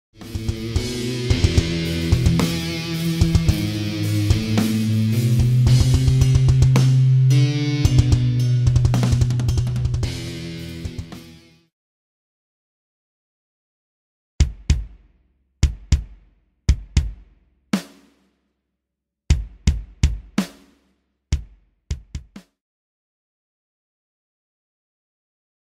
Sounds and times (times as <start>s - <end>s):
Drum: 0.2s - 11.5s, 14.4s - 18.3s, 19.3s - 22.5s.